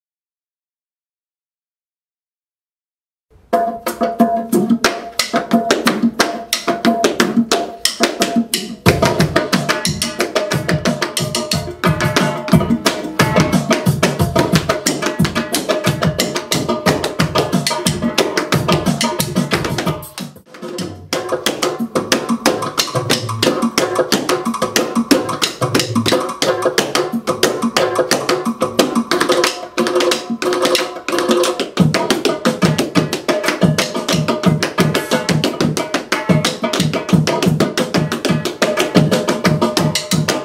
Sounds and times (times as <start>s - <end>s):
Music: 3.3s - 40.4s.